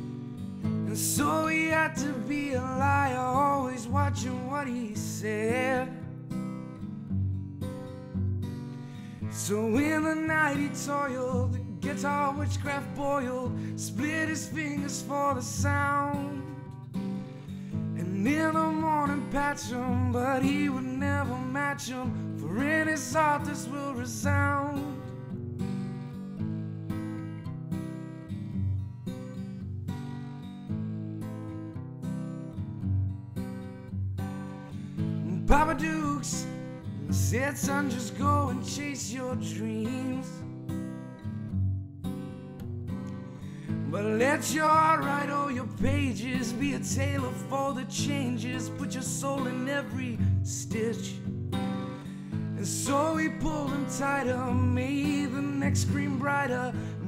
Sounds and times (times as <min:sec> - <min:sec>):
Music: 0:00.0 - 0:57.0.